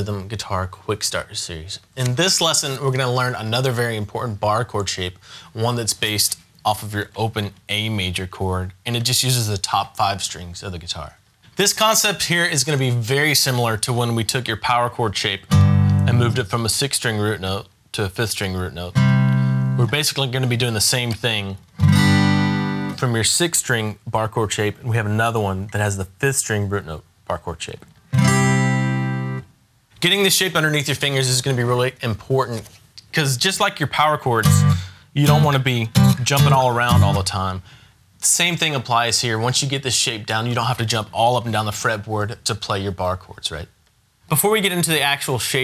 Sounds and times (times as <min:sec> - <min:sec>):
Speech: 0:00.0 - 0:15.5, 0:16.1 - 0:19.0, 0:19.8 - 0:21.6, 0:23.0 - 0:27.9, 0:30.0 - 0:45.6
Acoustic guitar: 0:15.3 - 0:16.5, 0:18.9 - 0:23.2, 0:27.9 - 0:30.2, 0:34.0 - 0:37.5
Strum: 0:15.5 - 0:16.4, 0:34.4 - 0:37.3.